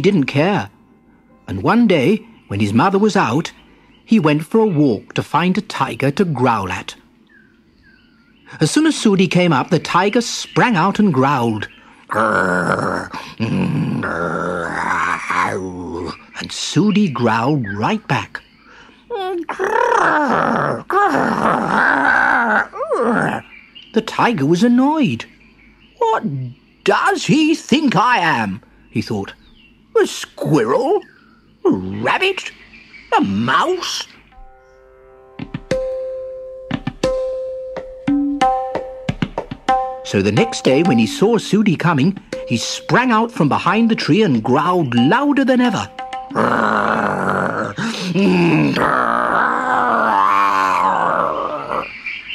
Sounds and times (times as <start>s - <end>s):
Speech: 1.5s - 7.0s, 8.5s - 18.4s, 24.0s - 25.3s, 26.0s - 29.4s, 30.0s - 34.2s, 40.0s - 51.8s
Growling: 12.1s - 16.2s, 19.4s - 23.5s, 46.3s - 51.9s.